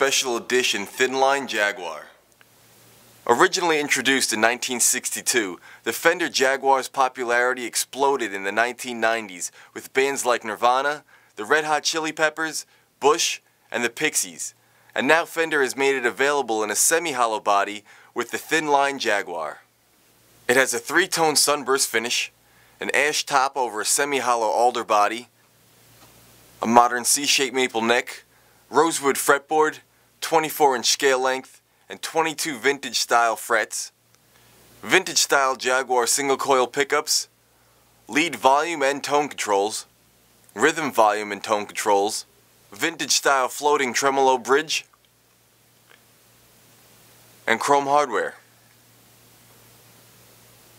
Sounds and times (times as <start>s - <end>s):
Speech: 0.0s - 2.2s, 3.2s - 19.7s, 20.5s - 25.3s, 26.6s - 34.0s, 34.8s - 37.3s, 38.1s - 39.9s, 40.5s - 45.0s, 47.5s - 48.5s.